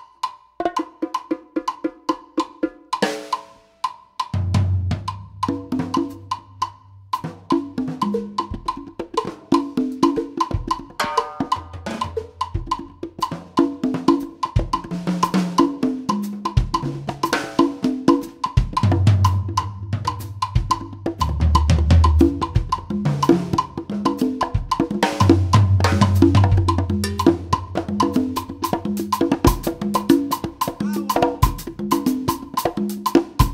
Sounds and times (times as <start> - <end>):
Percussion: 0.0 - 33.5.